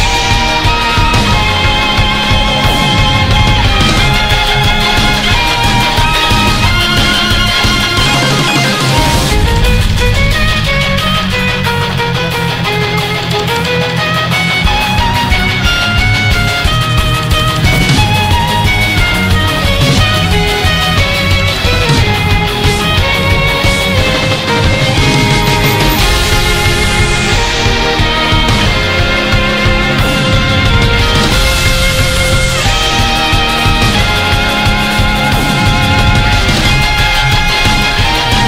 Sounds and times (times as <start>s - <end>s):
Music: 0.0s - 38.4s.